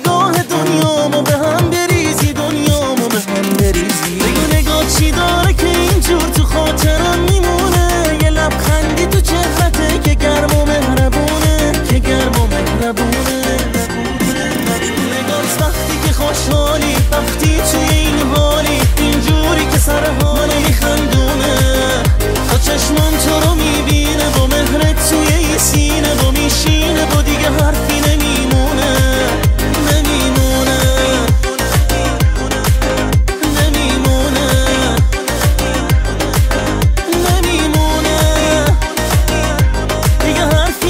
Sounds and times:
Music: 0.0 - 40.9.

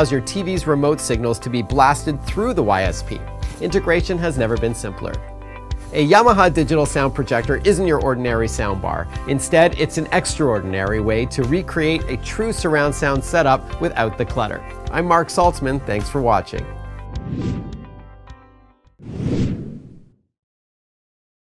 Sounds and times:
Speech: 0.0 - 5.2, 5.9 - 16.7
Music: 0.0 - 19.0.

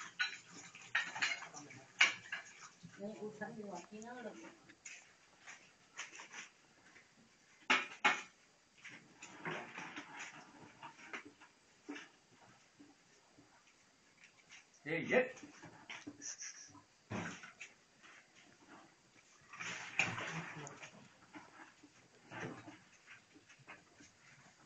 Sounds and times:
Speech: 3.0 - 4.5, 14.8 - 15.4.

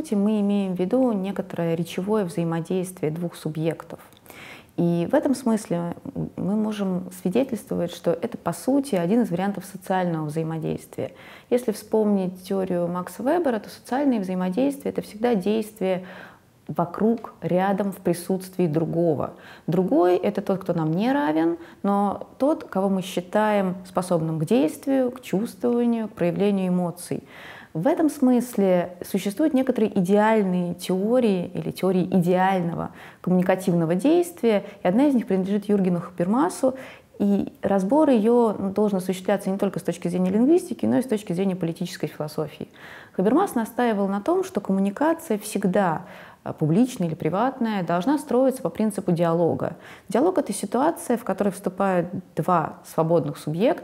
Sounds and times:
Female speech, woman speaking: 0.0 - 4.2, 4.8 - 16.1, 16.7 - 53.8
Narration, monologue: 0.0 - 53.8.

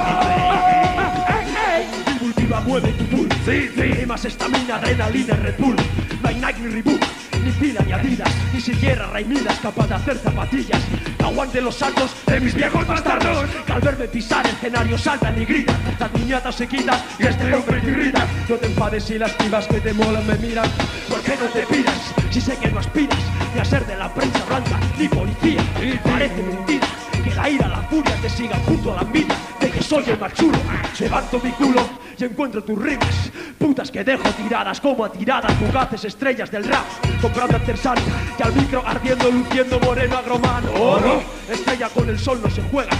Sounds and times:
Music: 0.0 - 42.9.

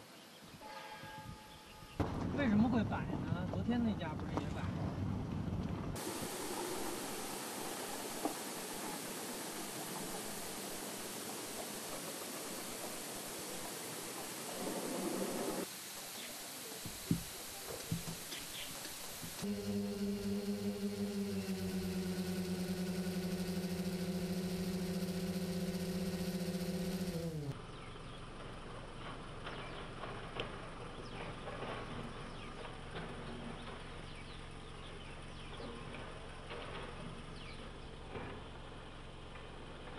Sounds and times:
Rustle: 6.0 - 19.5.

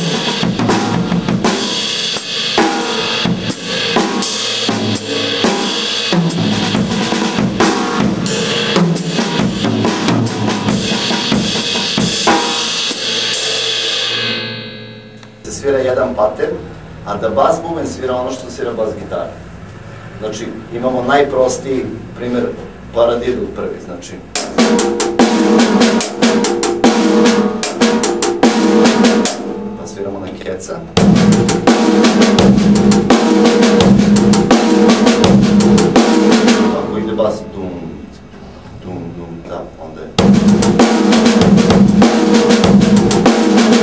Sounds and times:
Bass drum: 0.0 - 13.1, 31.0 - 36.8, 40.2 - 43.8
Drum roll: 0.0 - 15.5, 24.4 - 30.0, 31.0 - 37.1, 40.2 - 43.8
Drum kit: 0.0 - 15.8, 24.3 - 37.4, 40.2 - 43.8
Cymbal: 0.0 - 16.1, 24.3 - 30.3, 30.9 - 37.6, 40.2 - 43.8
Speech: 15.4 - 19.4, 20.2 - 24.3, 29.8 - 31.0, 36.6 - 40.2.

